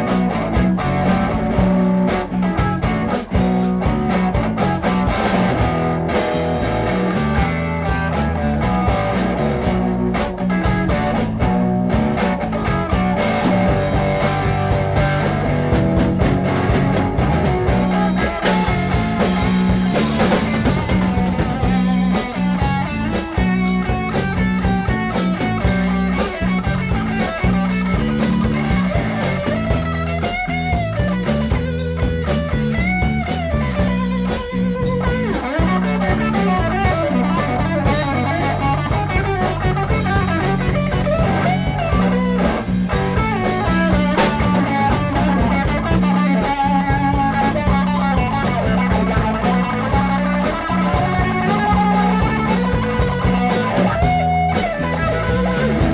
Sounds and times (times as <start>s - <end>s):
Blues: 0.0s - 55.9s
Guitar: 0.0s - 55.9s
Rock music: 0.0s - 55.9s.